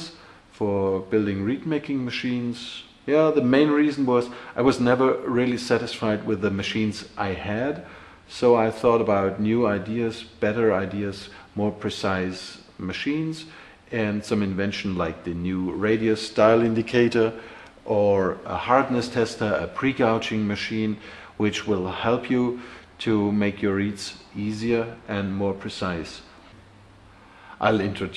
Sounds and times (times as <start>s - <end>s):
Speech: 0.0s - 26.3s, 27.6s - 28.1s.